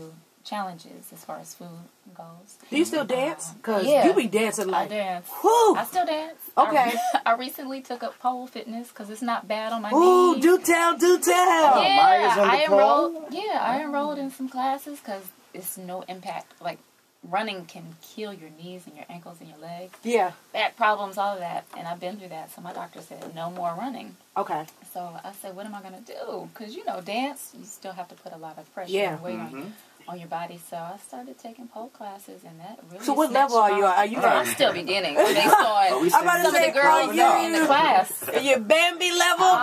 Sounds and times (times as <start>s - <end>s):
Speech: 0.0s - 39.6s.